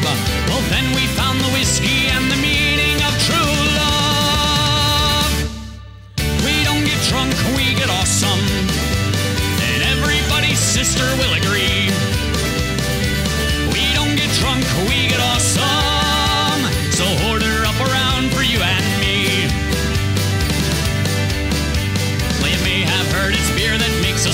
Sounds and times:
Music: 0.0s - 24.3s.

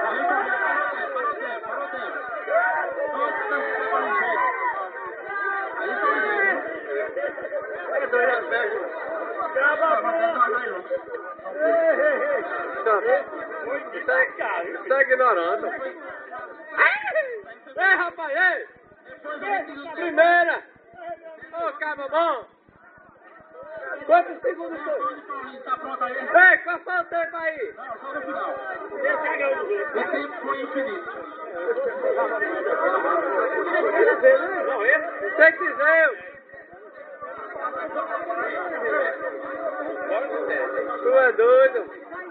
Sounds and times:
Speech: 0.0s - 42.3s.

